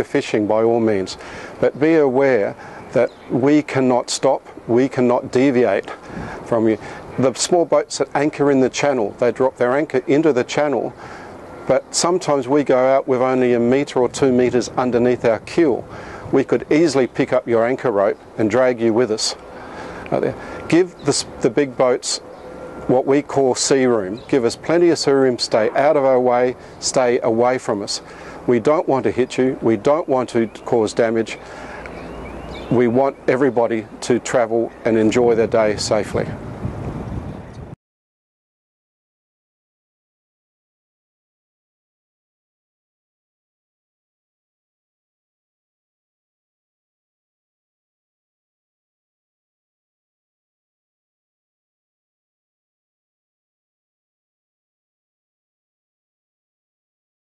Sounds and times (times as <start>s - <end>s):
Speech: 0.0s - 11.0s, 11.7s - 19.4s, 20.1s - 22.3s, 22.9s - 31.4s, 32.7s - 36.4s.